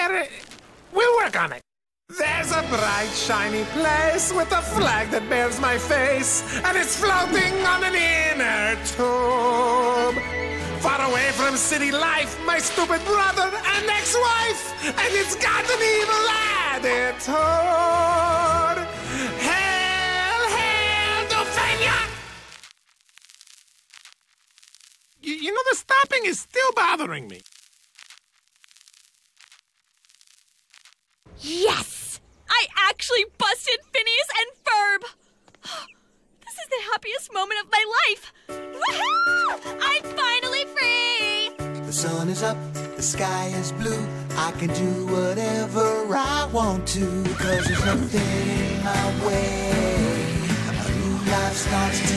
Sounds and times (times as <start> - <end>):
Speech: 25.2 - 27.4, 31.4 - 35.1, 36.5 - 38.2, 39.8 - 41.5.